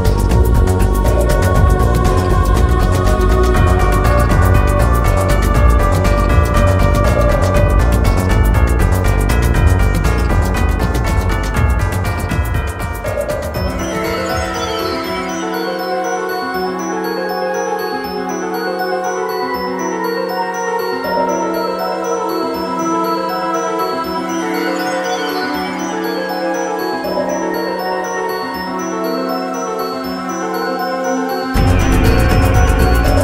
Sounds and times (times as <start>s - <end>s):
Music: 0.0s - 33.2s.